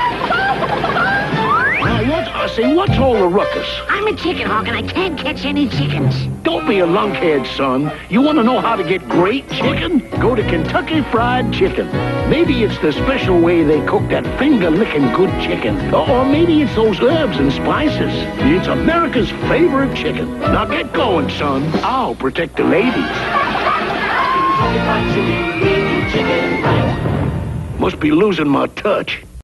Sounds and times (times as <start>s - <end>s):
Music: 0.9s - 28.2s
Speech: 1.9s - 23.2s, 27.8s - 29.3s.